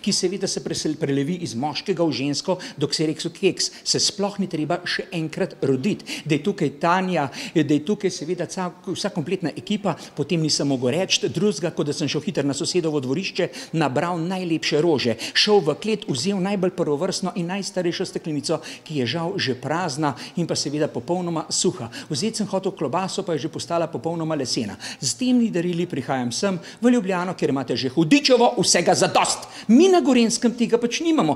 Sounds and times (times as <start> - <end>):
Speech: 0.0 - 31.3.